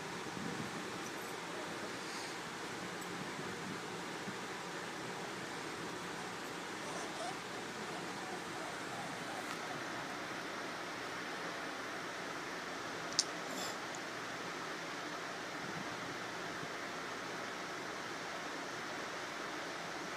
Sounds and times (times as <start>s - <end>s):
Whimper (dog): 6.8s - 10.3s.